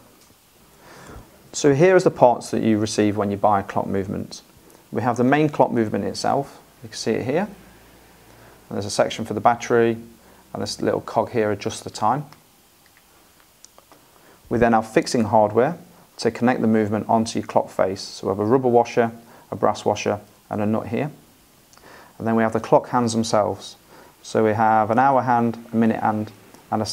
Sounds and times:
Speech: 1.5 - 7.7, 8.7 - 12.4, 14.5 - 21.2, 22.2 - 26.9.

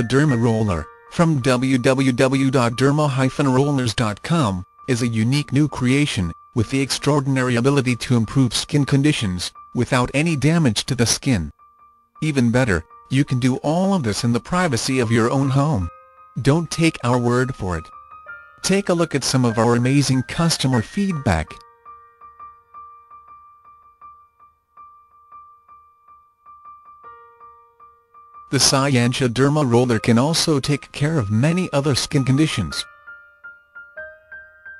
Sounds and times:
Speech: 0.0 - 11.5, 12.2 - 17.9, 18.6 - 21.6, 28.5 - 32.9
Music: 0.0 - 34.8.

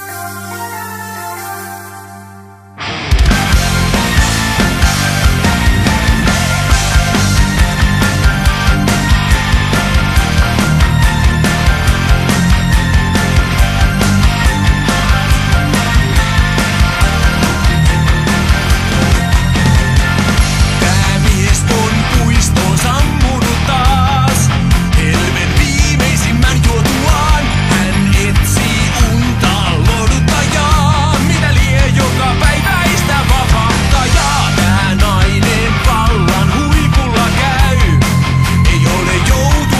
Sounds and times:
Music: 0.0 - 39.7.

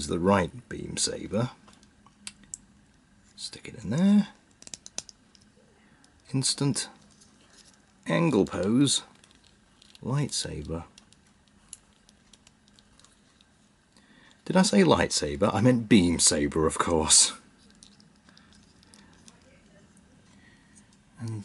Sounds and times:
Speech: 0.0 - 1.6, 3.4 - 4.4, 6.3 - 7.0, 8.0 - 9.1, 10.0 - 10.9, 14.5 - 17.4, 21.2 - 21.4.

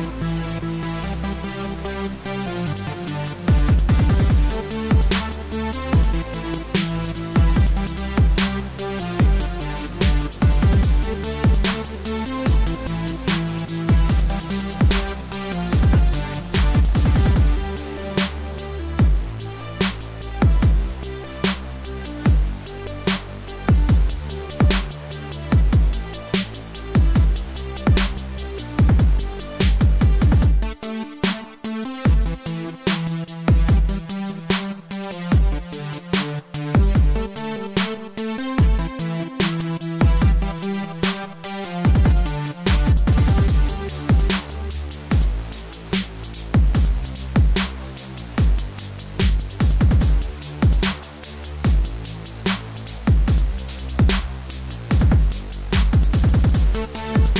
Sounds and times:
Music: 0.0 - 57.3.

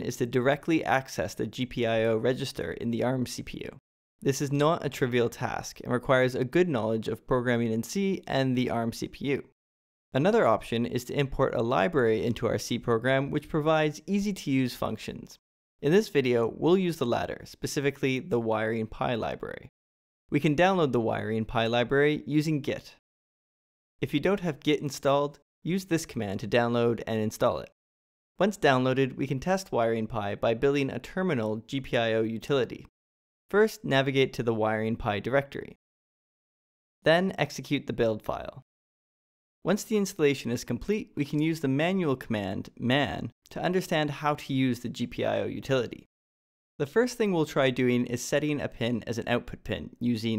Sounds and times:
Speech: 0.0 - 9.6, 10.2 - 19.7, 20.3 - 23.0, 24.0 - 27.8, 28.4 - 32.9, 33.5 - 35.8, 37.0 - 38.7, 39.7 - 46.1, 46.8 - 50.3.

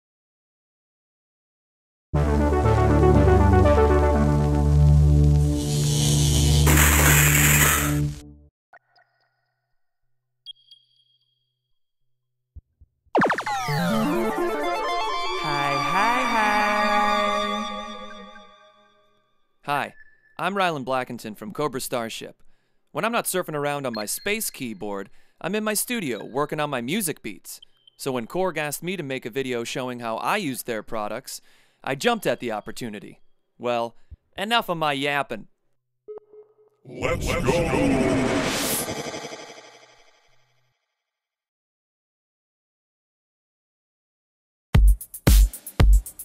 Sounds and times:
Speech: 15.4 - 17.2, 19.7 - 22.4, 23.0 - 35.5, 36.9 - 38.4.

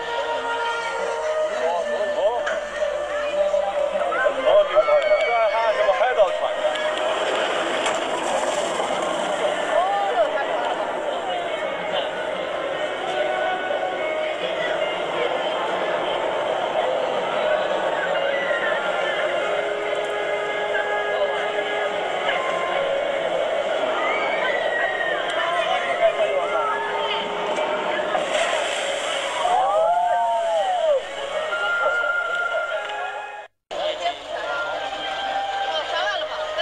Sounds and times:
Speech: 0.0 - 28.8, 31.3 - 36.6.

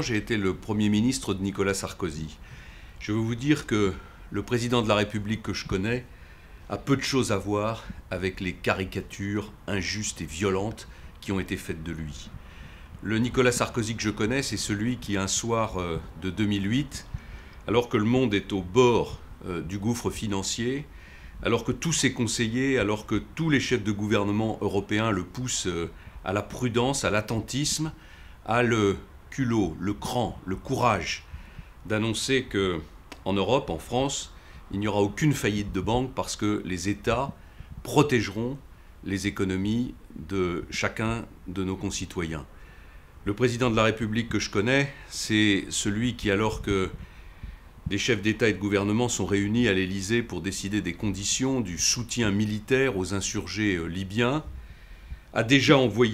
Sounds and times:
Speech: 0.0 - 2.4, 3.0 - 6.1, 6.7 - 12.4, 13.0 - 42.5, 43.2 - 47.0, 47.9 - 54.5, 55.3 - 56.1.

